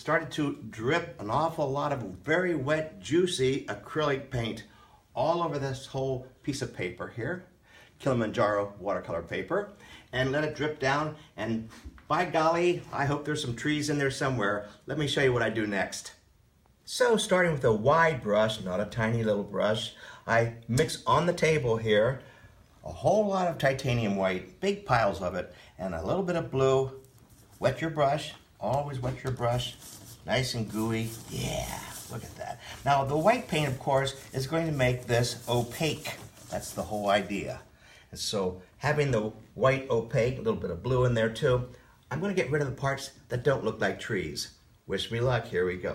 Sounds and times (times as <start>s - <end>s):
Speech: 0.0s - 45.9s.